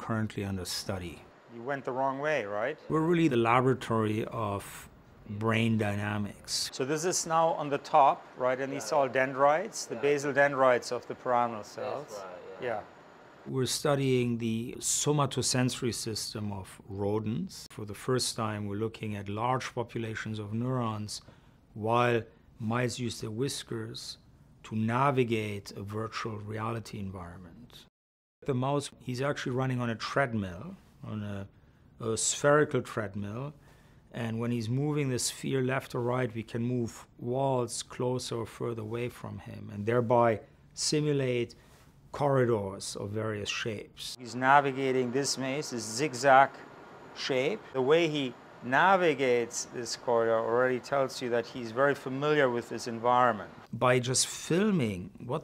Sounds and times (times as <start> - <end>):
Speech: 0.0 - 12.9, 13.5 - 46.6, 47.2 - 55.4.